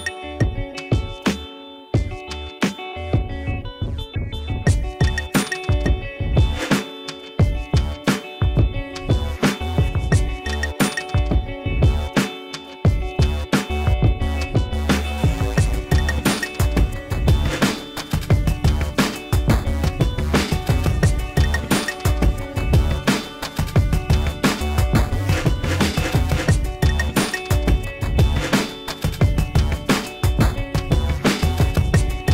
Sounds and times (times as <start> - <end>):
Music: 0.0 - 32.3.